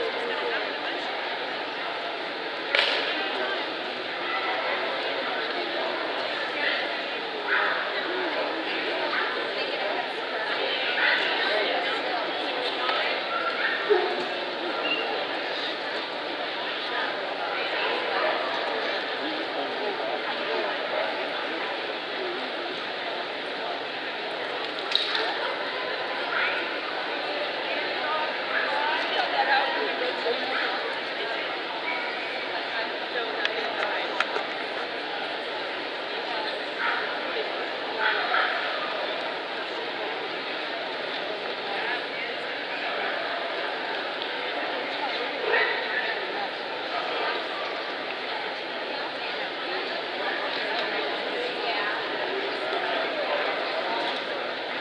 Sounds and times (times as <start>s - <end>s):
Speech: 0.0s - 54.8s.